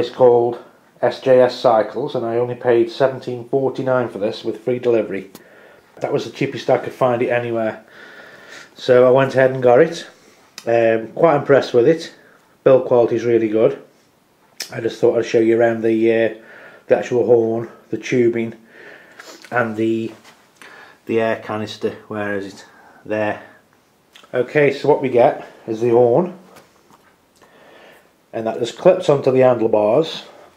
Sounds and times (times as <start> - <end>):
Speech: 0.0 - 5.4, 6.0 - 7.9, 8.8 - 13.9, 14.6 - 18.6, 19.5 - 20.3, 21.1 - 23.6, 24.2 - 26.5, 28.3 - 30.4
Inside, small room: 0.0 - 30.5.